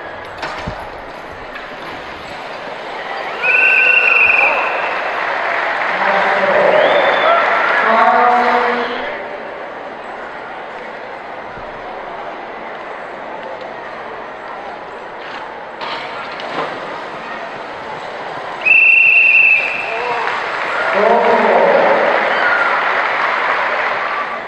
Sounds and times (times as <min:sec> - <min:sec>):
Speech: 0:05.9 - 0:09.4, 0:19.3 - 0:22.5.